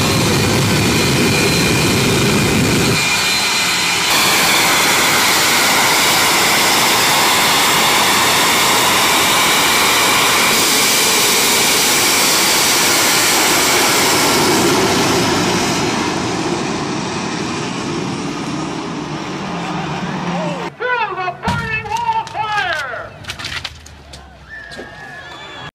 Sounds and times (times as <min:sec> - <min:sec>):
Engine: 0:00.0 - 0:20.7
Truck: 0:00.0 - 0:20.9.